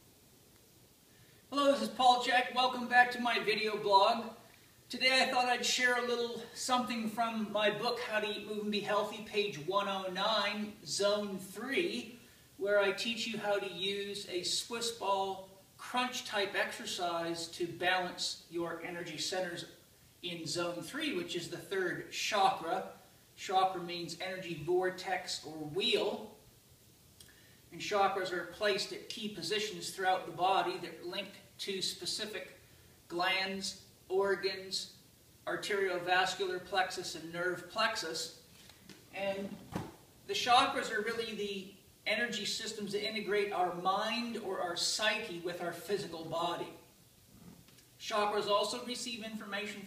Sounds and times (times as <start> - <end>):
Speech: 1.5 - 26.4, 27.7 - 38.4, 39.1 - 39.6, 40.3 - 46.9, 48.0 - 49.8.